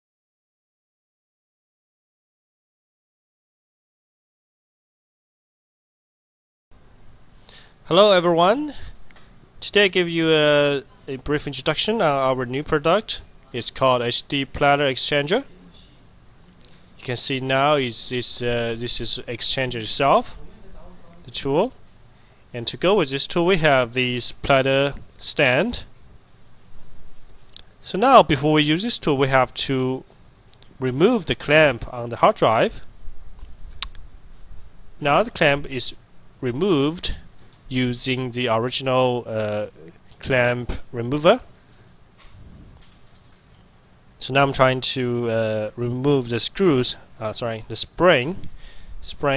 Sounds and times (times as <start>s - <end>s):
Speech: 7.9s - 9.0s, 9.6s - 16.0s, 17.0s - 21.8s, 22.6s - 25.9s, 27.8s - 30.1s, 30.8s - 32.9s, 35.0s - 41.5s, 44.2s - 49.3s.